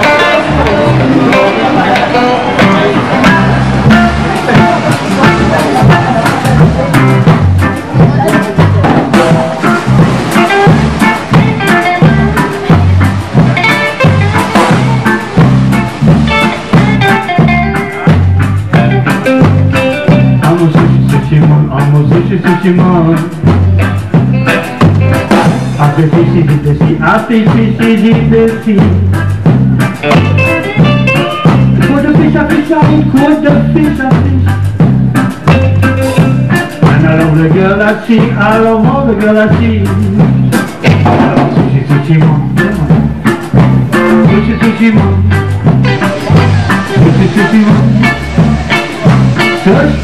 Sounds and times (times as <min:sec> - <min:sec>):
Independent music: 0:00.0 - 0:50.0.